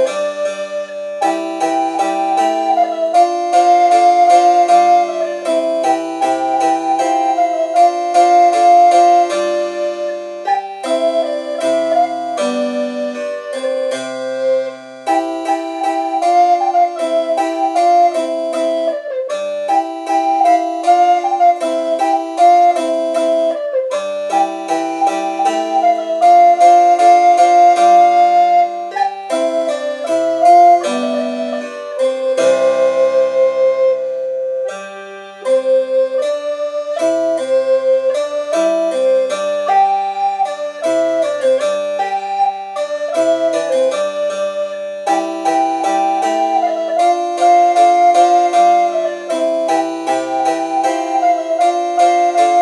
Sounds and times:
Harpsichord: 0:00.0 - 0:52.6.

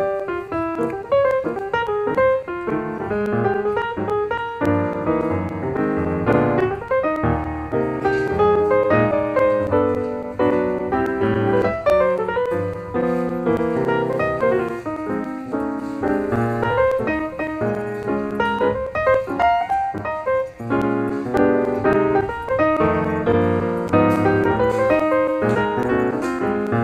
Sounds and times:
Music: 0:00.0 - 0:26.8.

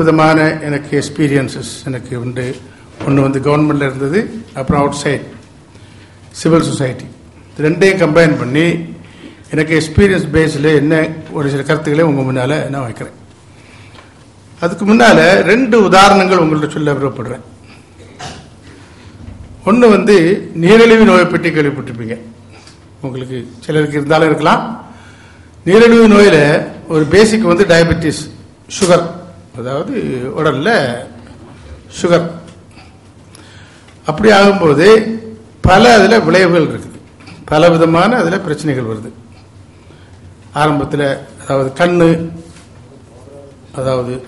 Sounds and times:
Male speech, man speaking: 0:00.0 - 0:05.4, 0:06.4 - 0:13.2, 0:14.6 - 0:17.4, 0:19.7 - 0:22.3, 0:23.0 - 0:24.8, 0:25.7 - 0:31.2, 0:31.9 - 0:32.5, 0:34.1 - 0:39.2, 0:40.6 - 0:42.4, 0:43.0 - 0:44.2
Narration, monologue: 0:00.0 - 0:44.2.

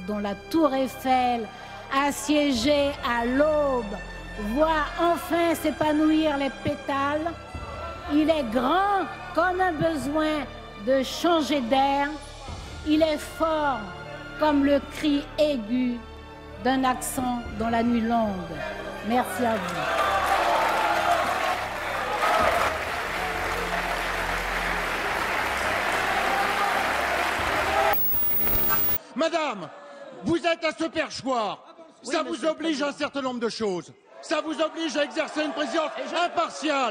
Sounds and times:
Speech: 0:29.1 - 0:36.9.

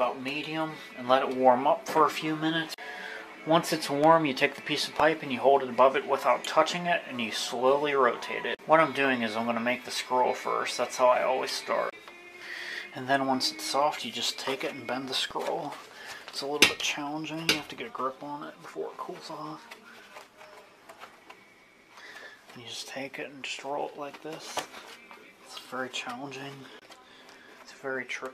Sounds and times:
Speech: 0:00.0 - 0:02.8, 0:03.4 - 0:12.0, 0:12.9 - 0:19.8, 0:22.6 - 0:24.7, 0:25.5 - 0:26.8, 0:27.7 - 0:28.3.

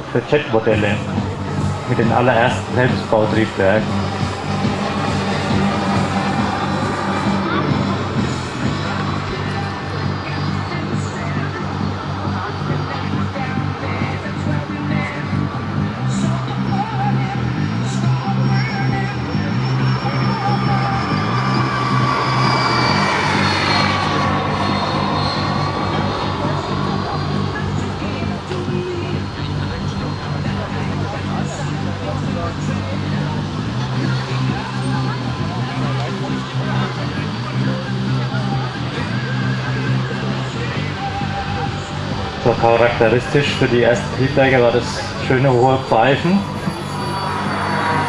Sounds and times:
Music: 0:00.0 - 0:48.0
Vehicle: 0:00.0 - 0:48.0.

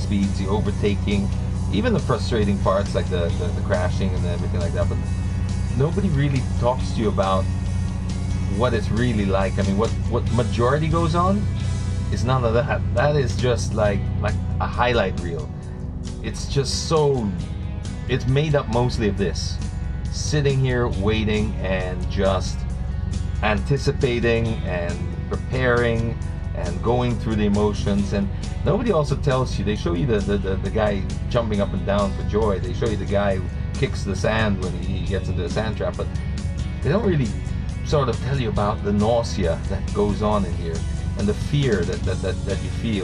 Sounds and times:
Speech: 0:00.0 - 0:05.0, 0:05.8 - 0:07.5, 0:08.5 - 0:11.5, 0:12.1 - 0:15.5, 0:16.2 - 0:17.5, 0:18.1 - 0:22.6, 0:23.4 - 0:36.1, 0:36.8 - 0:43.0
Music: 0:00.0 - 0:43.0.

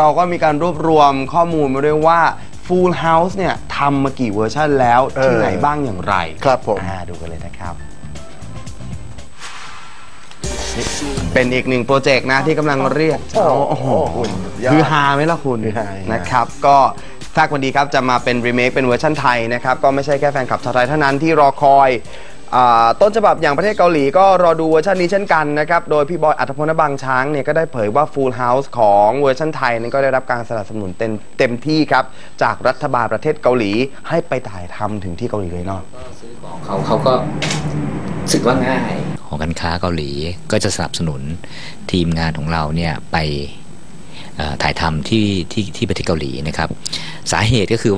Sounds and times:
Speech: 0:00.0 - 0:07.8, 0:10.8 - 0:37.3, 0:38.3 - 0:43.6, 0:44.4 - 0:47.9
Music: 0:00.0 - 0:33.8.

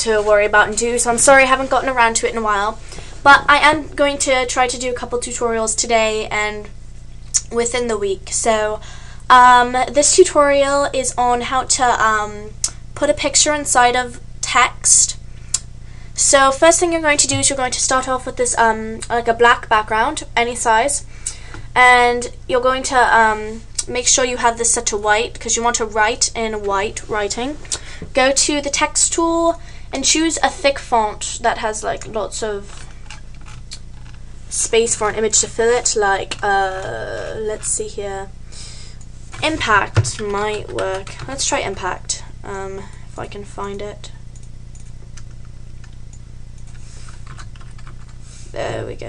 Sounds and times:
Speech: 0:00.0 - 0:06.7, 0:07.4 - 0:15.2, 0:16.2 - 0:21.0, 0:21.8 - 0:32.8, 0:34.5 - 0:38.3, 0:39.4 - 0:44.2, 0:48.5 - 0:49.0.

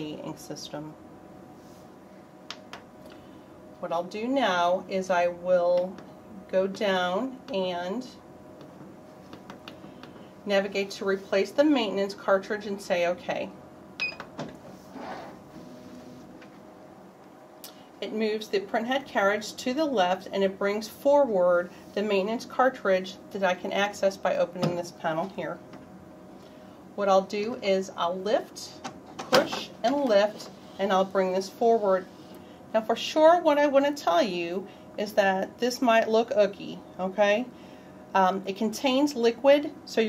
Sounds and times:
Speech: 0:00.0 - 0:01.0, 0:03.8 - 0:08.2, 0:10.5 - 0:13.6, 0:18.0 - 0:25.6, 0:27.0 - 0:32.1, 0:32.7 - 0:37.5, 0:38.1 - 0:40.0.

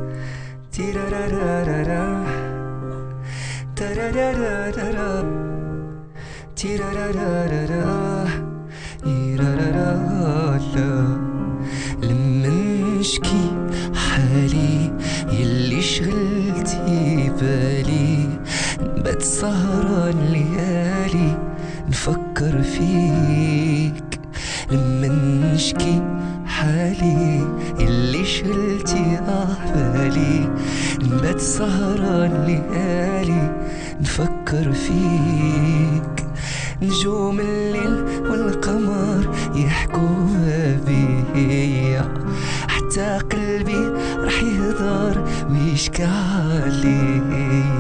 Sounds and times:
Music: 0:00.0 - 0:47.8.

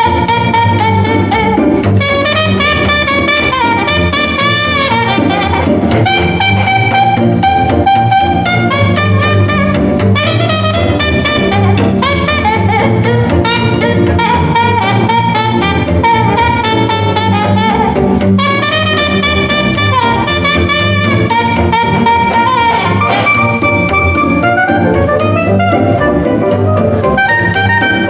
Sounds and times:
Jazz: 0:00.0 - 0:28.0.

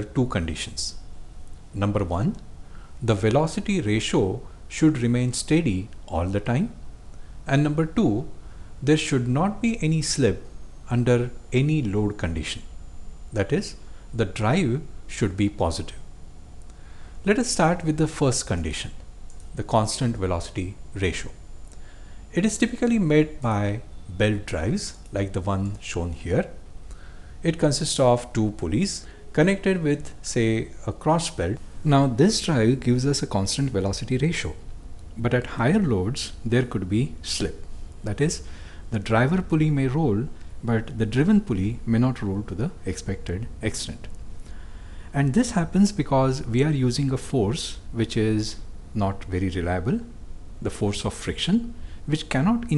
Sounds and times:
Speech: 0:00.0 - 0:01.0, 0:01.7 - 0:06.8, 0:07.5 - 0:12.7, 0:13.3 - 0:16.1, 0:17.2 - 0:21.4, 0:22.3 - 0:26.6, 0:27.4 - 0:44.2, 0:45.1 - 0:52.7.

